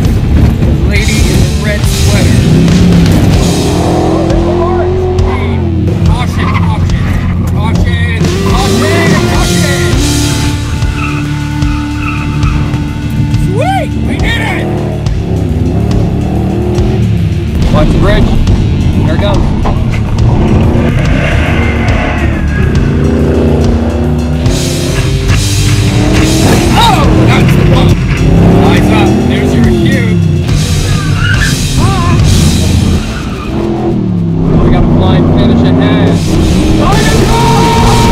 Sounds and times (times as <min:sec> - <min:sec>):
Car: 0:00.0 - 0:38.1
Music: 0:00.0 - 0:38.1
Speech: 0:04.3 - 0:09.9, 0:28.6 - 0:30.2, 0:34.5 - 0:36.2.